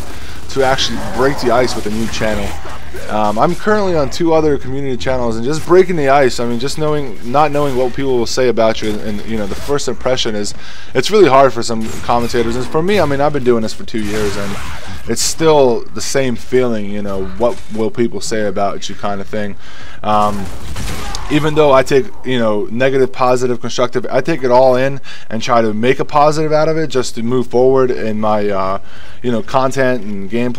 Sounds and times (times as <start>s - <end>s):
Speech: 0.4s - 20.5s, 21.2s - 30.5s.